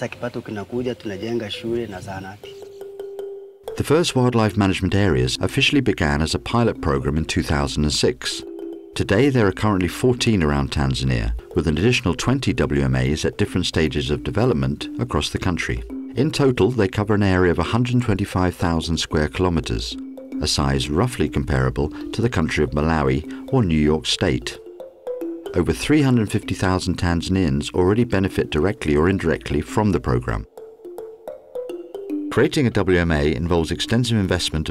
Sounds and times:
Speech: 0.0s - 2.5s, 3.8s - 8.4s, 9.0s - 24.6s, 25.6s - 30.5s, 32.4s - 34.7s
Music: 0.3s - 34.7s.

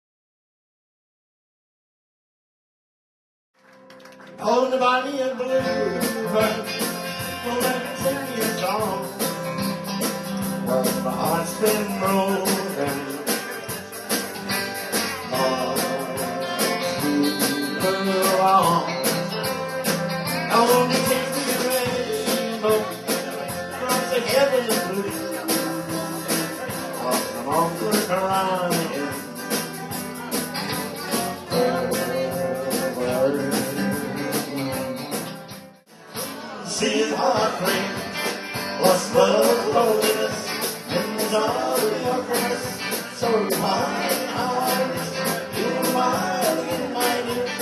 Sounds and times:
Music: 3.6s - 47.6s
Speech: 10.7s - 13.7s, 20.5s - 35.0s.

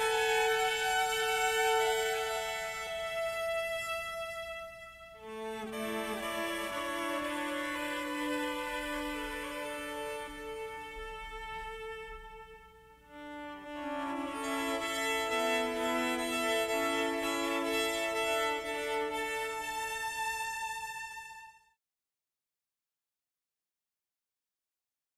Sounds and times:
Violin, fiddle: 0.0s - 21.6s.

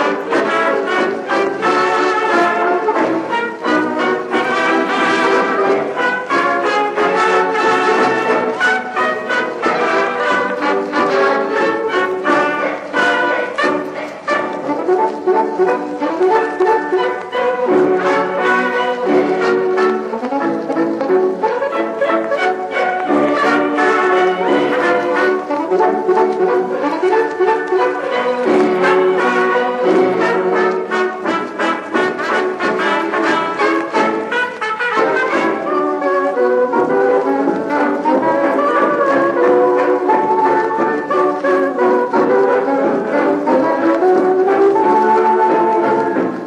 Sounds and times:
Orchestra: 0.0s - 46.4s.

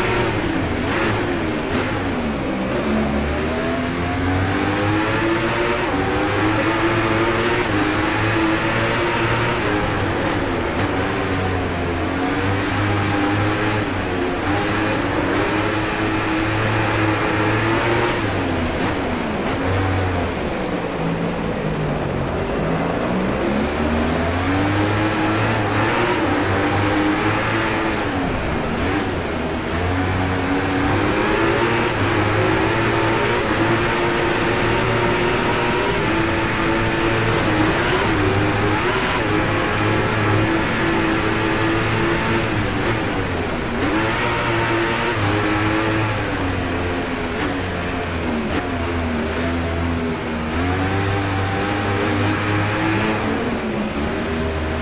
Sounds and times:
Rain on surface: 24.2s - 54.8s.

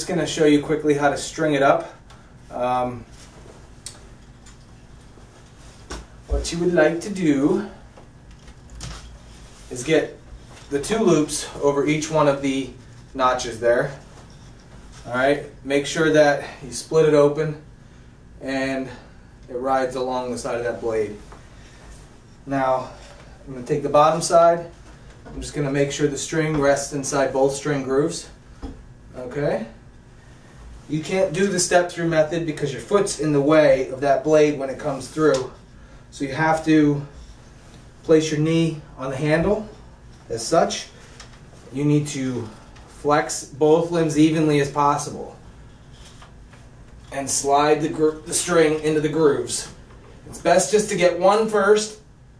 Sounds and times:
Speech: 0.0s - 3.1s, 6.3s - 7.8s, 9.7s - 14.1s, 15.0s - 17.6s, 18.4s - 21.2s, 22.4s - 28.4s, 29.1s - 29.8s, 30.9s - 37.2s, 38.0s - 41.0s, 41.7s - 45.4s, 47.1s - 52.1s.

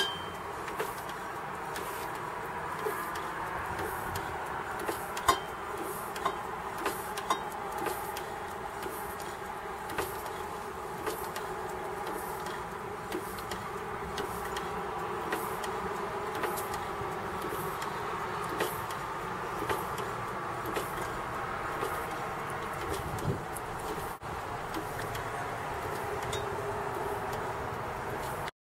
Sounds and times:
Medium engine (mid frequency): 0.0s - 28.5s.

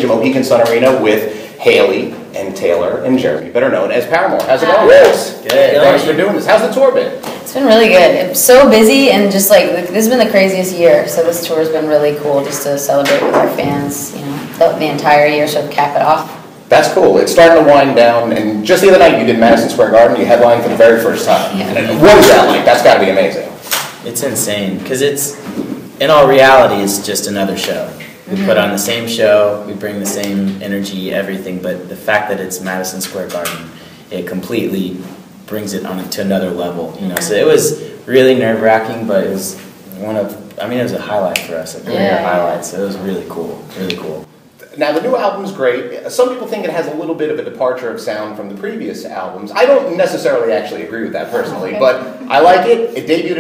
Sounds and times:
Speech: 26.0s - 53.4s.

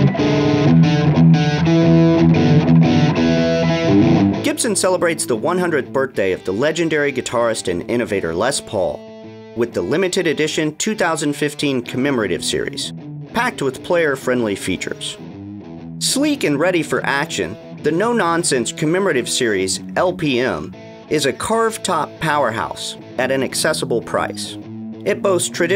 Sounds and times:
Speech: 4.5s - 9.0s, 9.6s - 15.2s, 16.0s - 25.7s.

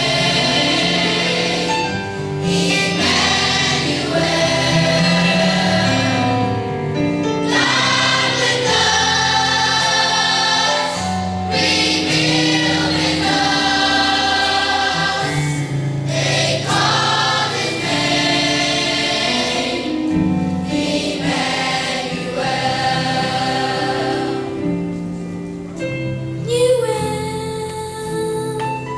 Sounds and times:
Choir: 0.0s - 6.6s, 7.4s - 25.0s
Gospel music: 0.0s - 28.9s.

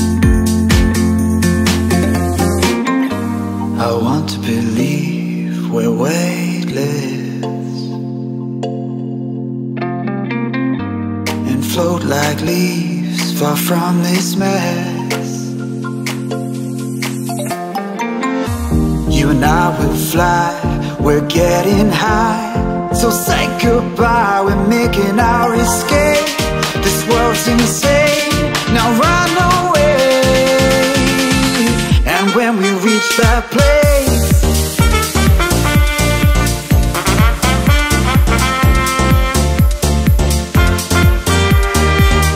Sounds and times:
House music: 0.0s - 9.0s, 11.2s - 42.3s.

